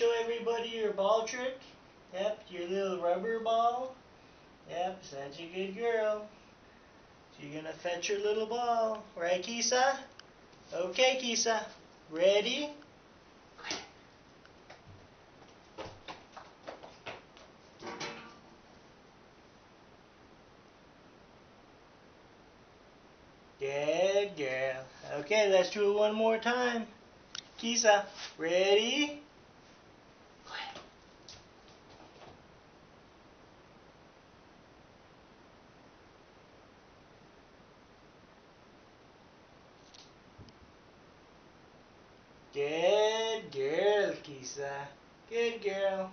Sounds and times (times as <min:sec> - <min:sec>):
Speech: 0:00.0 - 0:04.0, 0:04.7 - 0:06.3, 0:07.4 - 0:10.1, 0:10.7 - 0:12.8, 0:23.6 - 0:27.0, 0:27.6 - 0:29.3, 0:42.6 - 0:46.1.